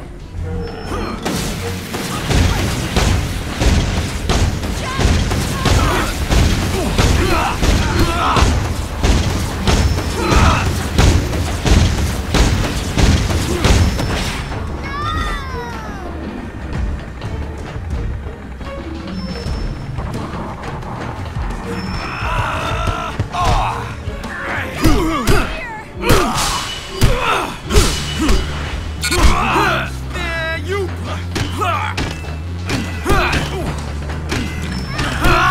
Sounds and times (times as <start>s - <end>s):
Music: 0.0s - 35.5s.